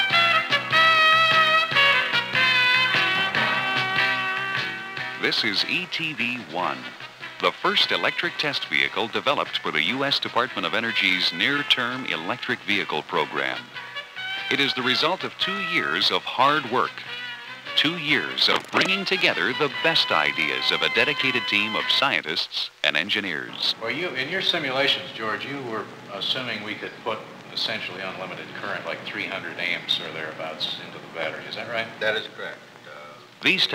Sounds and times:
Music: 0.0s - 22.3s, 23.6s - 33.7s
Speech: 5.2s - 13.8s, 14.5s - 17.1s, 17.8s - 33.7s.

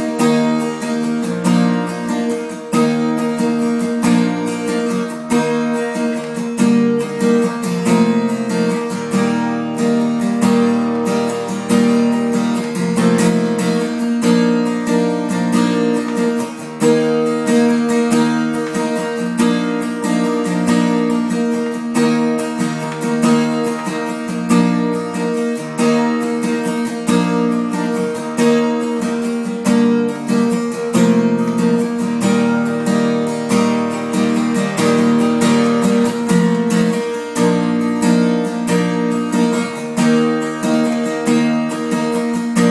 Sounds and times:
Acoustic guitar: 0.0s - 42.7s.

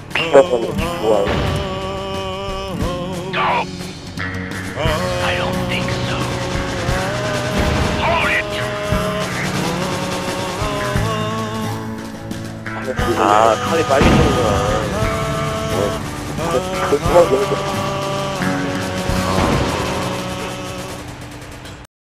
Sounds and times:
Male singing: 0.0s - 3.9s, 4.8s - 12.1s, 12.8s - 21.1s
Music: 0.0s - 21.9s
Speech: 0.2s - 1.4s, 3.4s - 3.7s, 4.8s - 6.4s, 8.0s - 9.5s, 12.8s - 14.9s, 15.7s - 17.9s.

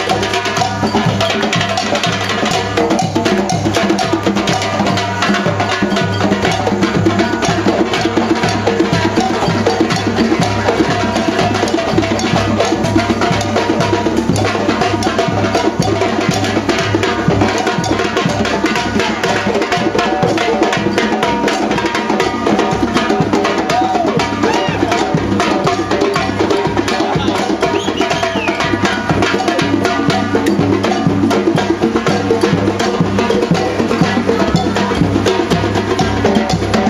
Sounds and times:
Percussion: 0.0s - 36.9s.

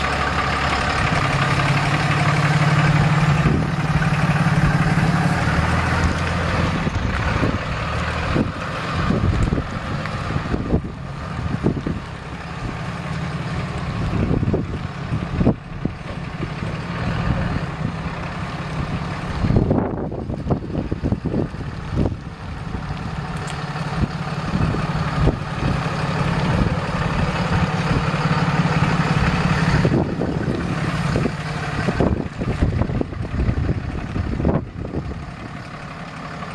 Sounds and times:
Car: 0.0s - 36.5s.

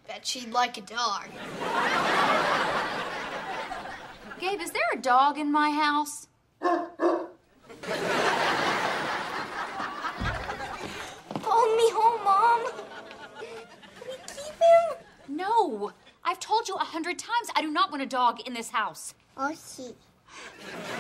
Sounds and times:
Child speech, kid speaking: 0.0s - 1.4s, 11.4s - 12.8s, 14.0s - 20.1s.

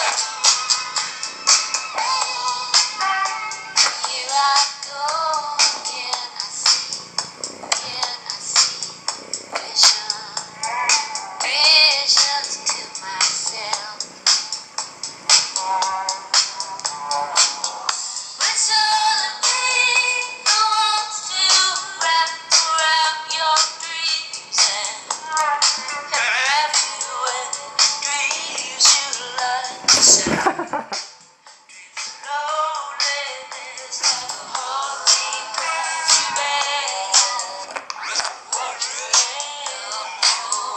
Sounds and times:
Music: 0.0s - 40.7s.

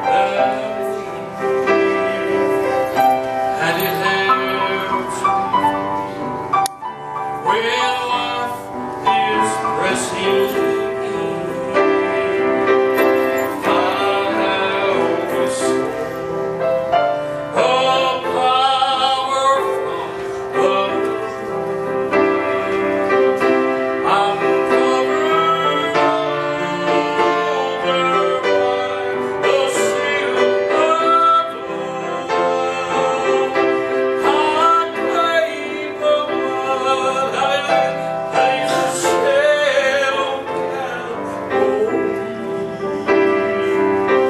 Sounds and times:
Male singing: 0.0s - 5.8s, 7.2s - 44.3s
Music: 0.0s - 44.3s.

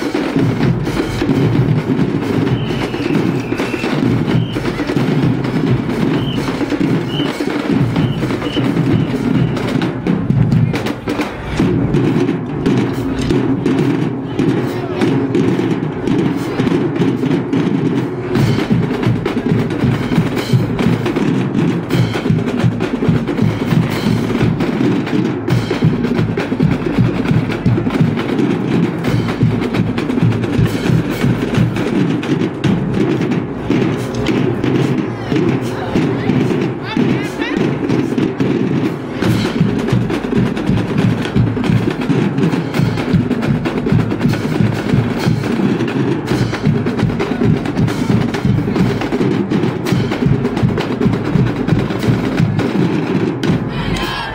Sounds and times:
Drum: 0.0s - 54.3s.

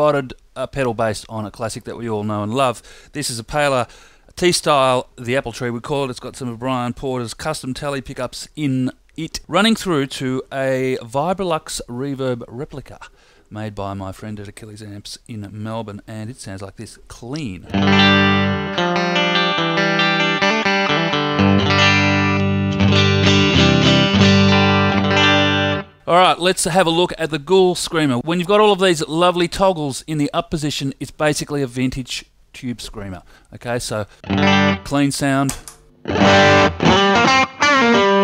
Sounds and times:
Speech: 0.0s - 17.8s, 26.1s - 34.1s, 34.8s - 35.6s.

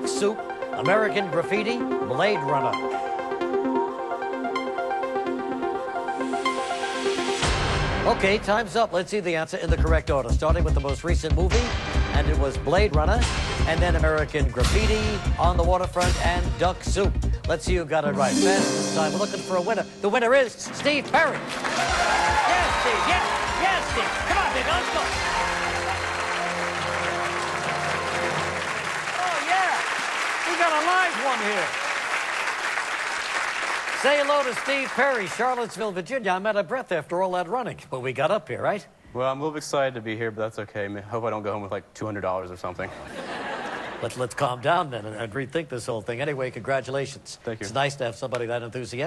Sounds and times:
Music: 0.0s - 29.5s
Speech: 8.1s - 21.4s, 34.0s - 42.9s, 44.0s - 49.0s.

